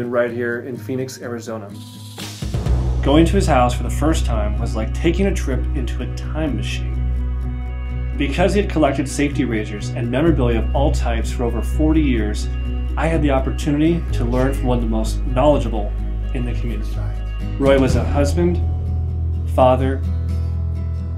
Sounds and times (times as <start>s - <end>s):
Speech: 0.0s - 1.8s, 3.1s - 7.0s, 8.2s - 18.6s, 19.5s - 20.1s
Music: 0.0s - 21.1s.